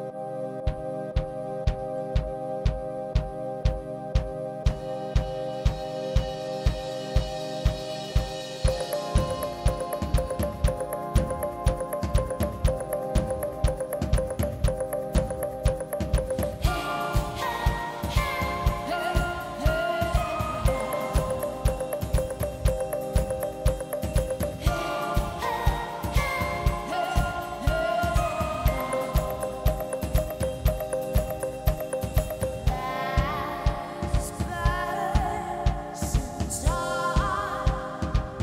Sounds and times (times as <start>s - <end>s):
Music: 0.0s - 38.4s.